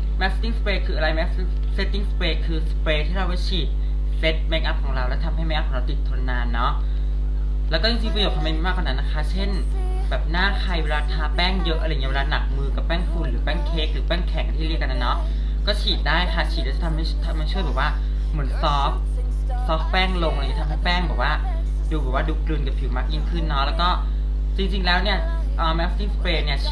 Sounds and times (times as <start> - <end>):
Speech: 0.2 - 6.9, 7.7 - 26.7.